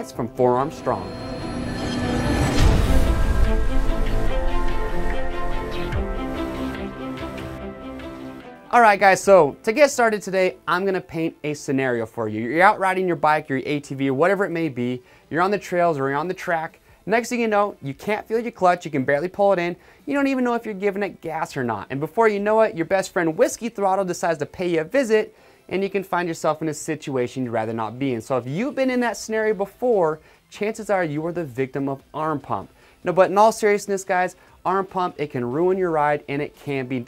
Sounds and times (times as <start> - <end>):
Speech: 0.0 - 1.1, 8.7 - 37.0
Music: 0.0 - 37.0.